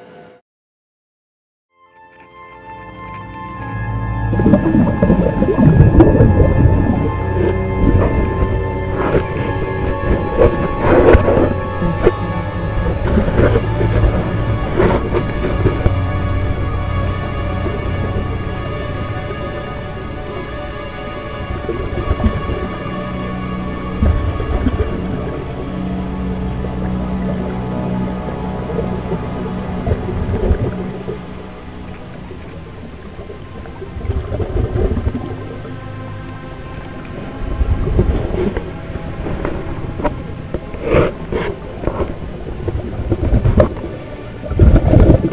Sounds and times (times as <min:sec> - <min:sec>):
Music: 0:01.7 - 0:45.3
Outside, rural or natural: 0:01.7 - 0:45.3.